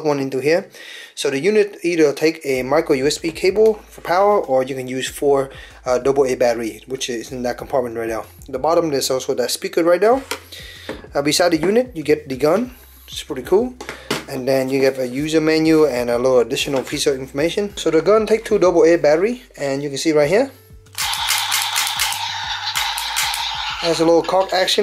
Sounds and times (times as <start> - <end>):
Speech: 0.0 - 10.2, 11.2 - 20.5, 23.8 - 24.8.